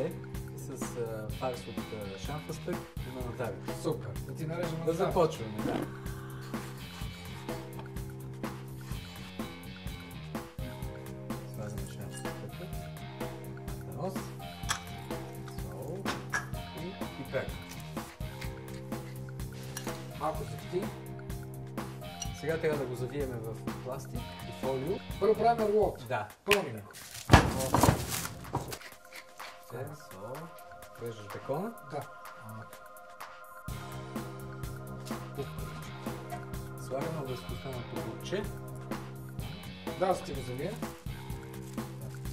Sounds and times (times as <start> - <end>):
Speech: 0.0 - 5.9, 11.5 - 12.8, 20.2 - 21.0, 22.3 - 27.9, 29.7 - 32.7, 36.8 - 38.5, 39.9 - 40.8
Music: 0.0 - 42.3.